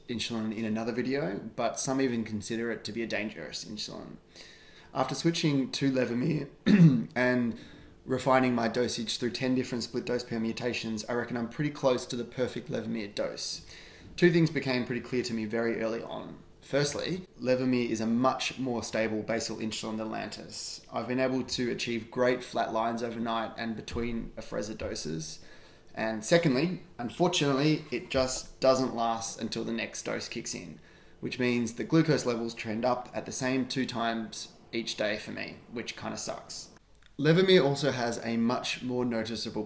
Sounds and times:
Speech: 0.0s - 4.3s, 4.9s - 39.6s.

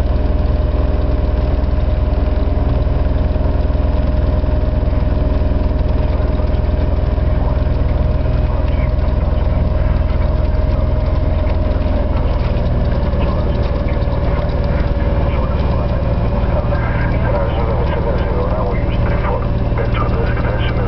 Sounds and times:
Idling: 0.0s - 20.8s
Vehicle: 0.0s - 20.8s
Speech: 7.1s - 10.4s, 13.1s - 20.8s.

